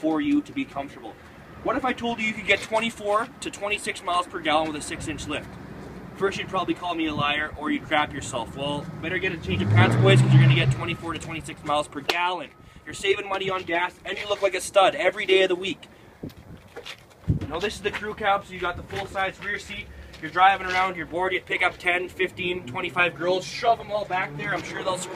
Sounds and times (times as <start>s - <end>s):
Speech: 0.0s - 5.4s, 6.2s - 15.8s, 17.4s - 25.1s
Car: 0.0s - 25.1s.